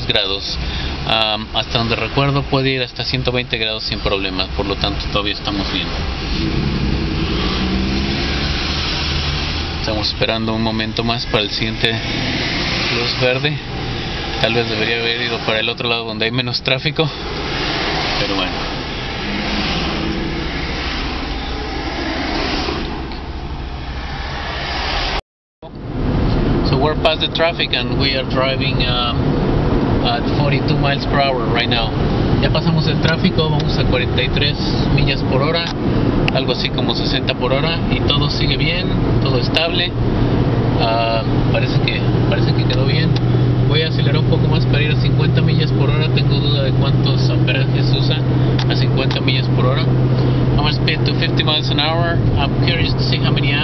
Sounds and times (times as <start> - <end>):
Speech: 0.0 - 6.0, 9.8 - 12.0, 12.9 - 13.6, 14.4 - 17.2, 18.2 - 18.6, 26.6 - 29.2, 30.0 - 40.0, 40.8 - 49.9, 50.6 - 53.6
Car: 0.0 - 53.6
Outside, urban or manmade: 0.0 - 53.6.